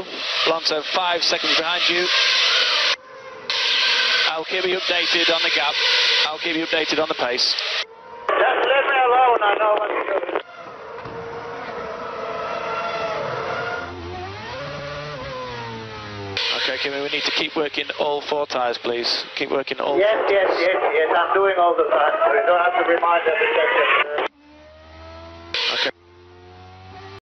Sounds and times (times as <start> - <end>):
Radio: 0.0 - 2.2, 4.3 - 10.5, 16.4 - 24.3, 25.6 - 26.0
Speech: 0.5 - 2.1, 4.3 - 7.6, 8.3 - 10.4, 16.5 - 24.3.